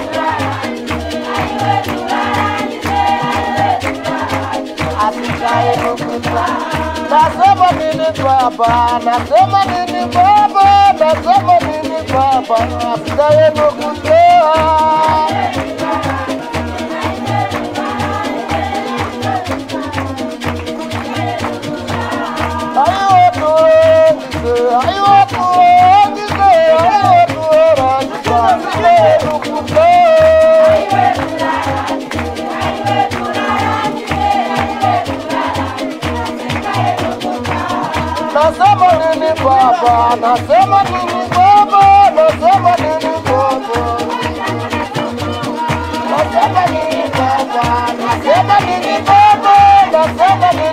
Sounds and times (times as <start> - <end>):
Choir: 0.0 - 8.0, 10.2 - 20.0, 20.8 - 50.7
Male singing: 4.9 - 16.3, 22.5 - 31.2, 38.0 - 50.7.